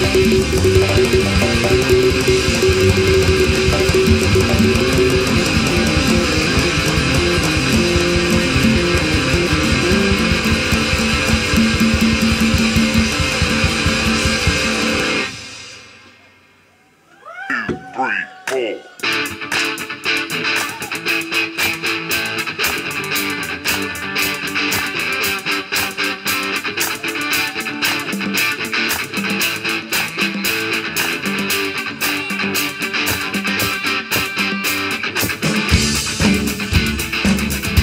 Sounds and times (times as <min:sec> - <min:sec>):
Disco: 0:00.0 - 0:15.4.